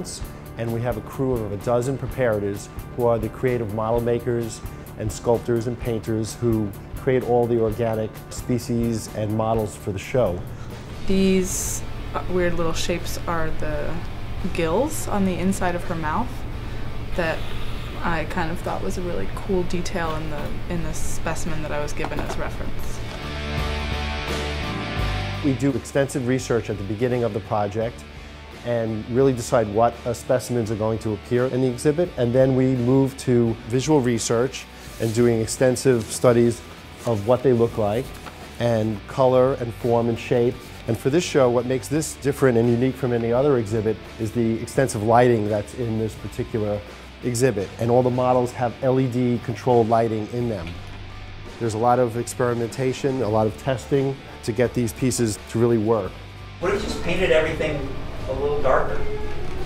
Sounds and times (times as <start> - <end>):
Music: 0.0 - 59.6.